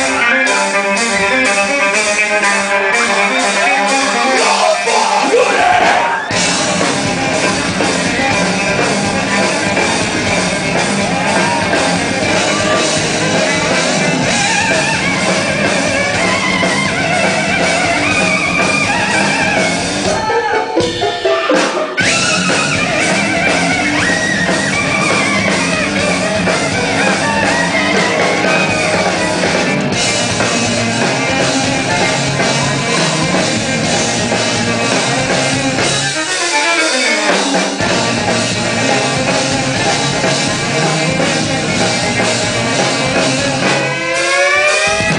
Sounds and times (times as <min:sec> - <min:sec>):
Music: 0:00.0 - 0:45.1.